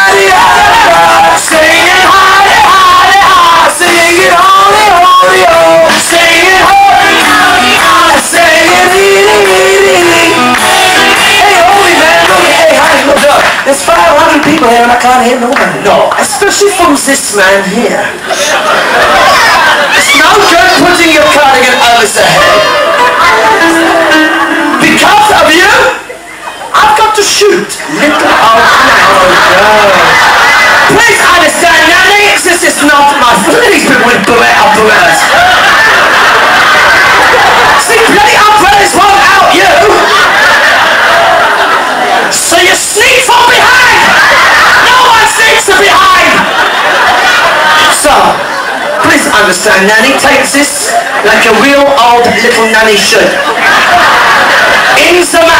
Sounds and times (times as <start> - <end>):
Music: 5.4 - 12.6, 22.7 - 25.0
Speech: 11.4 - 18.2, 20.0 - 22.7, 24.8 - 26.1, 26.7 - 30.2, 30.9 - 35.3, 37.8 - 40.1, 42.3 - 44.1, 44.9 - 46.5, 47.9 - 53.5, 55.0 - 55.5
Laughter: 18.2 - 20.6, 22.3 - 24.8, 27.8 - 31.0, 34.9 - 37.9, 39.7 - 42.3, 43.8 - 45.2, 46.0 - 49.3, 53.2 - 55.5.